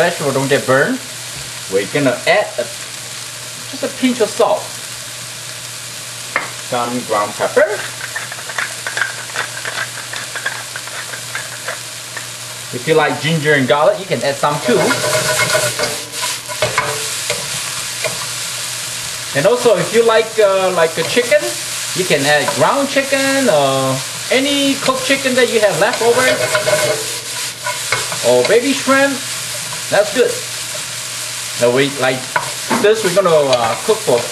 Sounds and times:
Sizzle: 0:00.0 - 0:34.3
Stir: 0:14.6 - 0:17.4, 0:25.9 - 0:28.3.

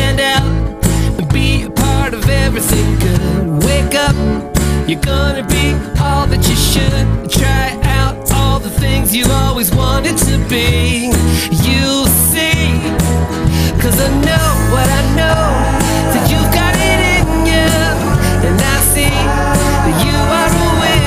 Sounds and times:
Music: 0:00.0 - 0:21.0.

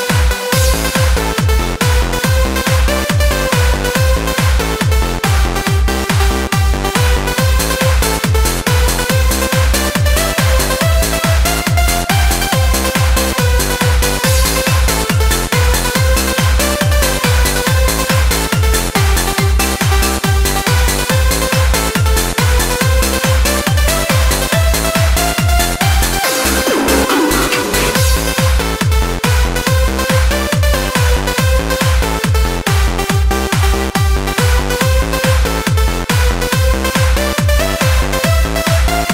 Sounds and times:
Trance music: 0:00.0 - 0:39.1.

